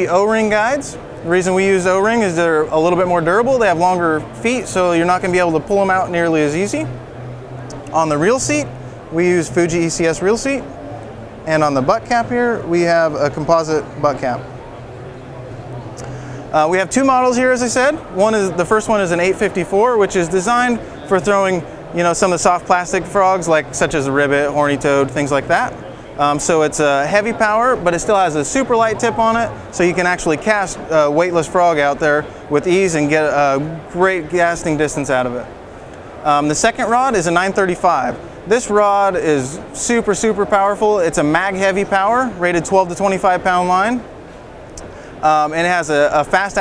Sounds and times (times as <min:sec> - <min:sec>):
Speech: 0:00.0 - 0:07.0, 0:07.9 - 0:10.7, 0:11.5 - 0:14.6, 0:16.5 - 0:35.5, 0:36.2 - 0:44.1, 0:45.2 - 0:46.6.